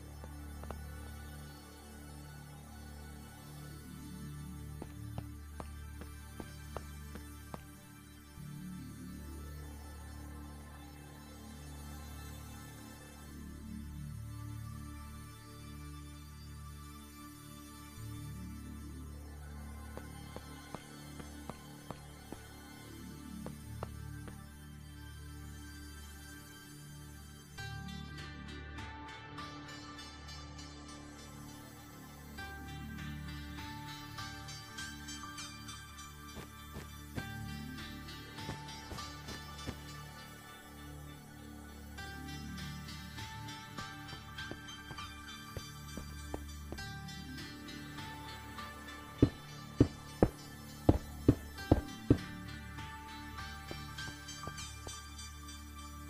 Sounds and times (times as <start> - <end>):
Music: 0.0 - 56.0.